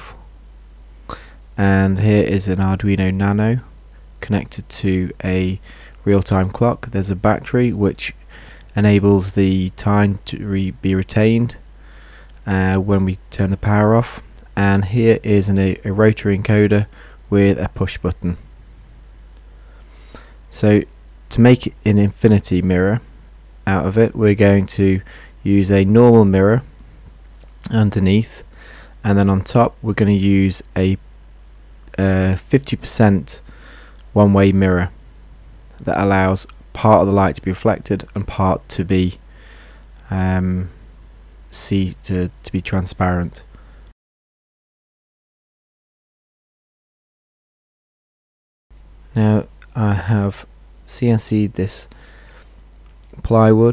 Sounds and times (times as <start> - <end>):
Speech: 0.0 - 0.2, 1.6 - 11.6, 12.4 - 18.4, 20.5 - 26.7, 27.6 - 31.0, 31.9 - 33.4, 34.1 - 35.0, 35.8 - 39.2, 40.0 - 40.8, 41.5 - 43.5, 49.1 - 51.9, 53.2 - 53.7.